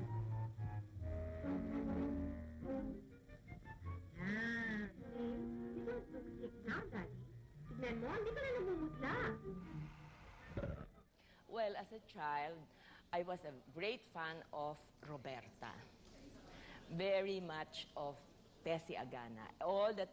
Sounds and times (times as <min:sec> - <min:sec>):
Music: 0:00.0 - 0:10.8
Speech: 0:11.5 - 0:20.1.